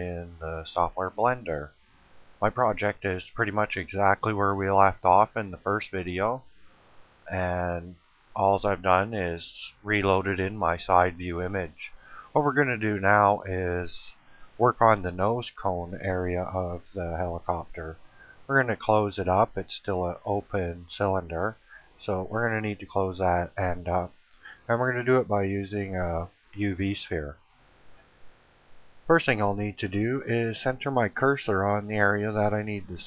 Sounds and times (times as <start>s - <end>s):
Speech: 0.0s - 1.7s, 2.4s - 6.5s, 7.3s - 27.4s, 29.1s - 33.0s.